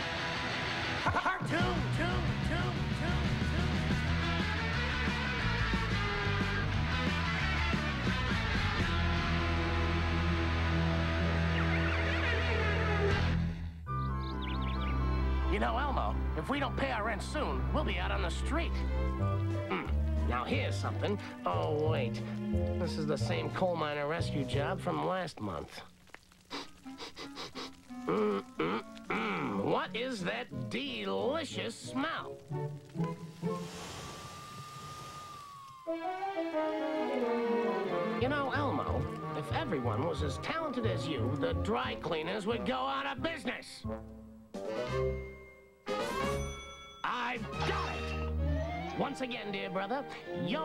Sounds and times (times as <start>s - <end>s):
Music: 0.0s - 34.2s, 35.3s - 50.6s
Speech: 1.1s - 3.3s, 15.5s - 18.8s, 19.7s - 22.2s, 22.8s - 25.9s, 29.4s - 32.3s, 38.2s - 43.8s, 47.1s - 48.0s, 49.0s - 50.6s.